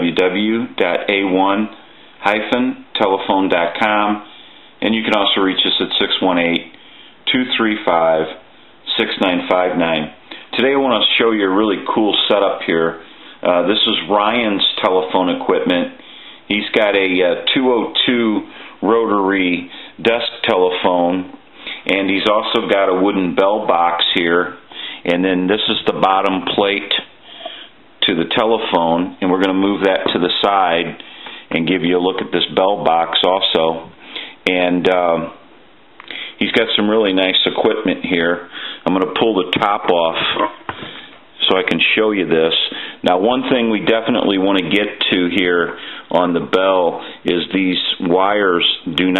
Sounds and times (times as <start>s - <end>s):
Speech: 0.0s - 27.2s, 28.0s - 35.4s, 36.1s - 40.8s, 41.4s - 49.1s.